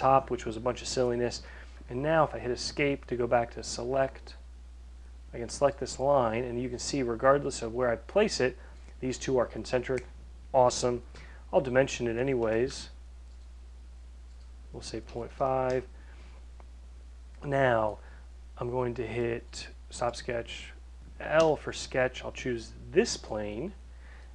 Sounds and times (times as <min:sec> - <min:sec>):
Speech: 0:00.0 - 0:04.4, 0:05.3 - 0:13.0, 0:14.7 - 0:15.9, 0:17.4 - 0:18.0, 0:18.6 - 0:23.8
Inside, small room: 0:00.0 - 0:24.3
Clicking: 0:13.3 - 0:13.5, 0:14.3 - 0:14.5.